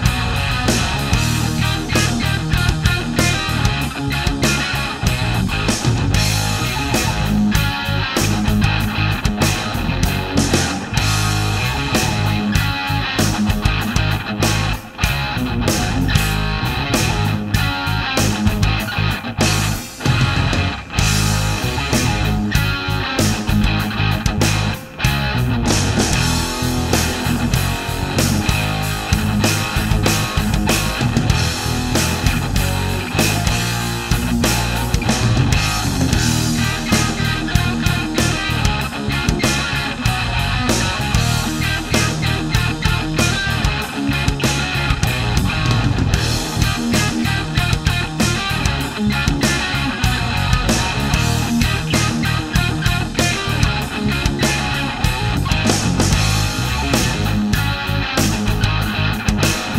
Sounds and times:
Bass guitar: 0.0 - 59.7
Strum: 0.0 - 59.7.

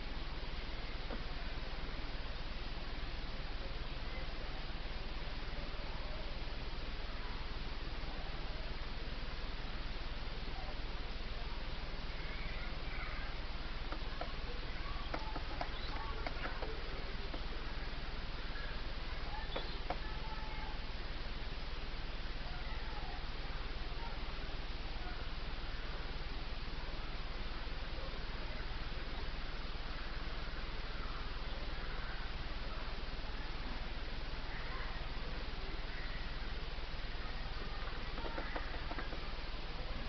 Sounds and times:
Outside, rural or natural: 0.0 - 40.0
Speech: 0.1 - 40.0.

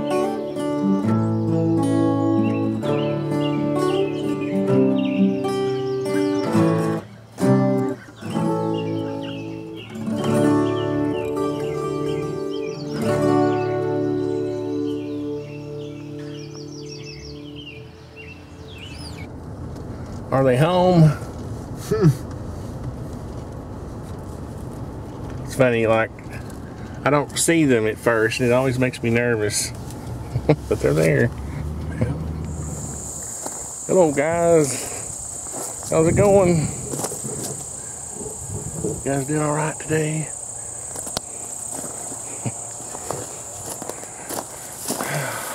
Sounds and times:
Speech: 20.3 - 21.3, 25.5 - 26.2, 27.0 - 29.8, 30.7 - 31.3, 33.9 - 34.9, 35.9 - 36.8, 39.0 - 40.4.

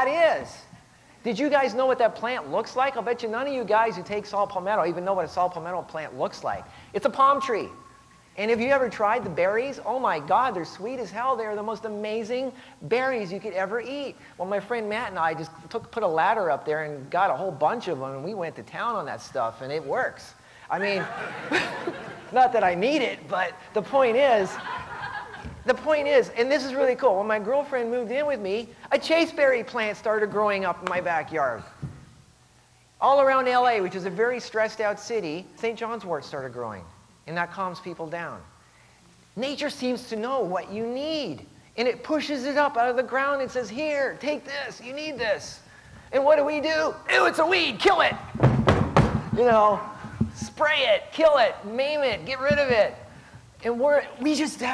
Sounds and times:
Speech: 0.0 - 7.8, 8.4 - 21.2, 22.3 - 24.6, 25.6 - 31.8, 33.0 - 38.5, 39.4 - 48.2, 49.4 - 54.7.

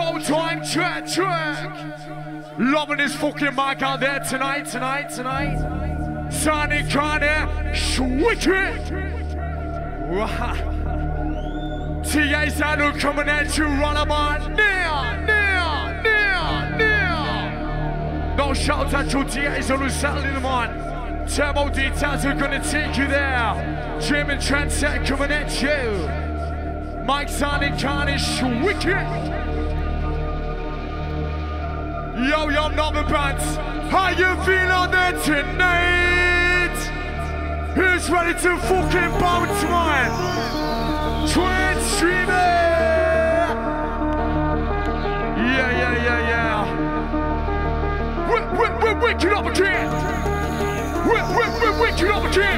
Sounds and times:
Speech: 0.0 - 2.0, 2.6 - 9.2, 10.0 - 10.7, 12.0 - 17.6, 18.4 - 26.2, 27.1 - 29.4, 32.2 - 37.1, 37.8 - 40.2, 41.3 - 43.7, 45.4 - 46.8, 48.3 - 50.3, 51.0 - 52.5
Music: 0.0 - 52.5.

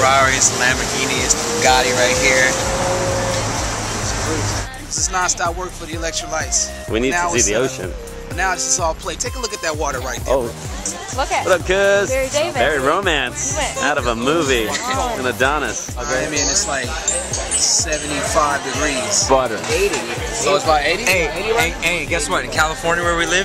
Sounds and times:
Speech: 0.0 - 2.7, 4.0 - 23.4
Music: 0.0 - 23.4.

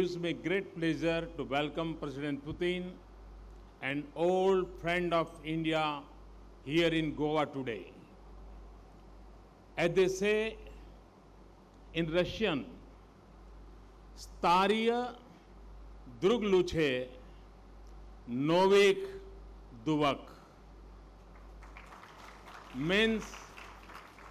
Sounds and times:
Male speech, man speaking: 0.0 - 3.0, 3.8 - 6.1, 6.7 - 8.0, 9.8 - 10.7, 12.0 - 12.8, 14.2 - 15.2, 16.2 - 17.2, 18.3 - 19.2, 19.8 - 20.4, 22.8 - 23.4
Narration, monologue: 0.0 - 21.6, 22.6 - 23.6.

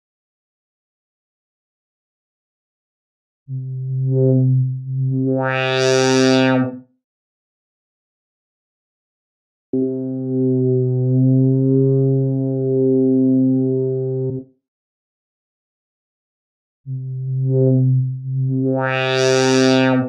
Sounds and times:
Music: 3.5 - 7.0, 9.8 - 14.6, 16.9 - 20.0.

